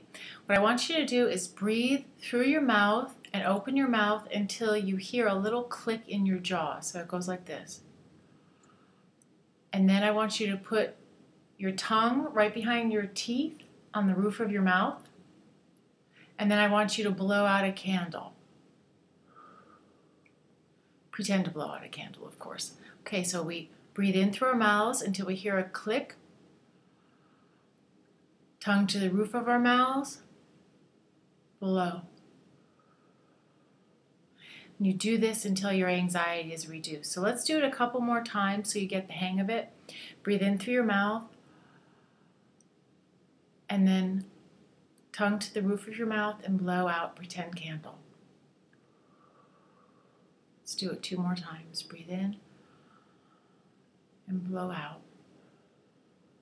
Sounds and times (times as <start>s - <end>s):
Speech: 0.4s - 7.8s, 9.8s - 11.0s, 11.6s - 15.1s, 16.4s - 18.4s, 21.2s - 26.2s, 28.6s - 30.3s, 31.6s - 32.2s, 34.8s - 41.3s, 43.7s - 44.3s, 45.2s - 48.0s, 50.7s - 52.4s, 54.3s - 55.1s.